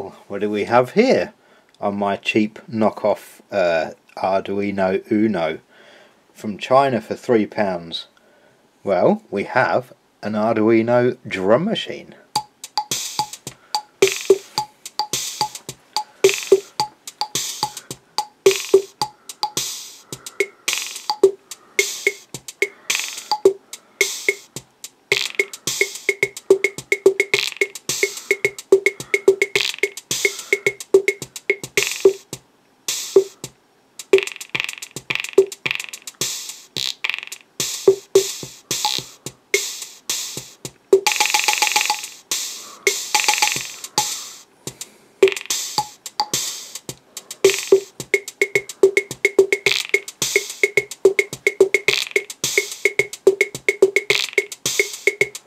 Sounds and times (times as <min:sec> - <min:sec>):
Drum machine: 0:12.4 - 0:55.4.